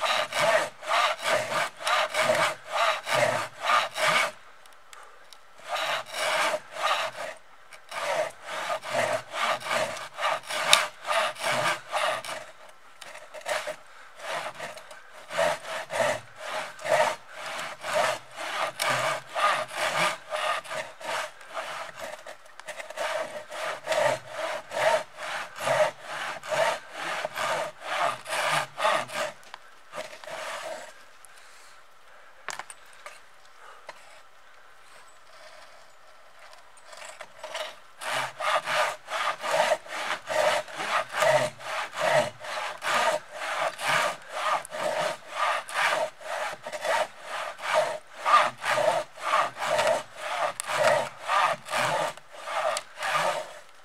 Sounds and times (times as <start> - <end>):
Sawing: 0.0 - 4.4, 5.6 - 31.0, 36.9 - 53.7
Wood: 0.0 - 4.4, 5.6 - 30.9, 36.9 - 53.7.